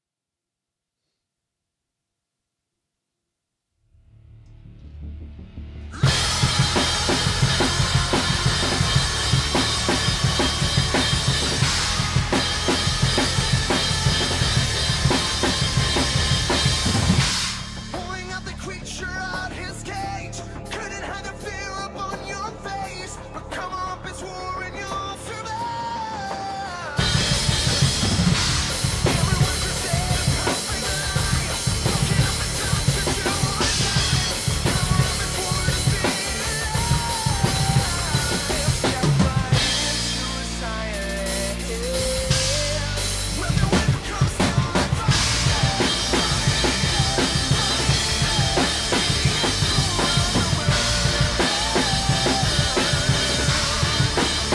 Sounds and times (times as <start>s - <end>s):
Bass drum: 5.6s - 19.7s, 27.0s - 40.8s, 41.5s - 54.5s
Drum kit: 5.6s - 54.5s.